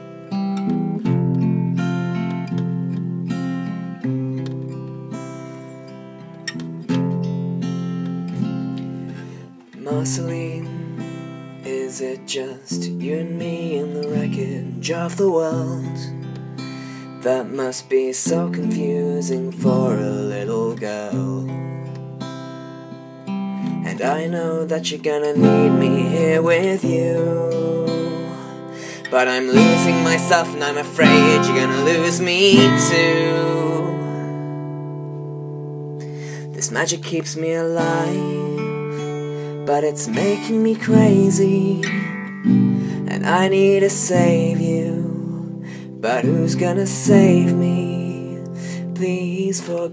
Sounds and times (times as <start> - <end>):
Acoustic guitar: 0.0 - 49.9
Strum: 18.3 - 49.5.